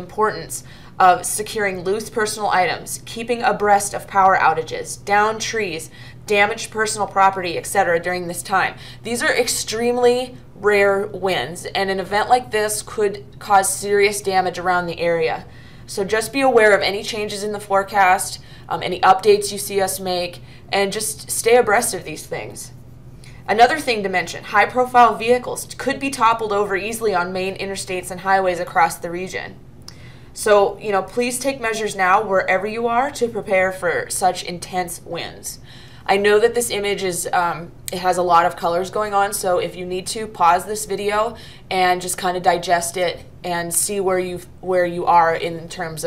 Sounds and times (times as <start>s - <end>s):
Speech: 0.0s - 22.8s, 23.5s - 29.6s, 30.4s - 46.0s.